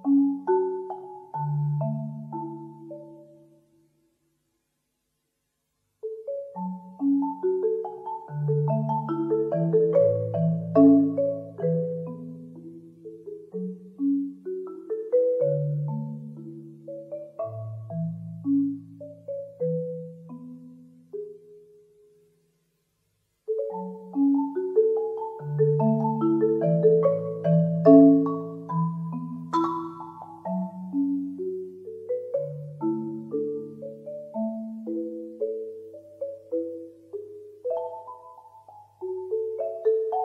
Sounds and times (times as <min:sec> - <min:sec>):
Marimba, xylophone: 0:00.0 - 0:03.9, 0:06.0 - 0:22.2, 0:23.5 - 0:40.2
Glockenspiel: 0:06.0 - 0:22.2, 0:23.5 - 0:40.2.